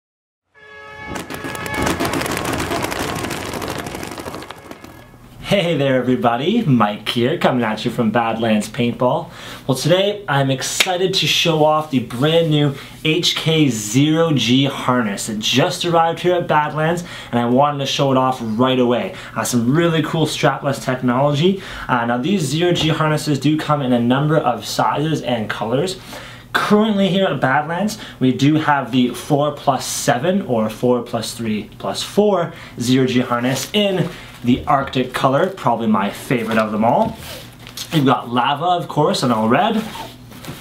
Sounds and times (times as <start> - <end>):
Speech: 5.4 - 40.1.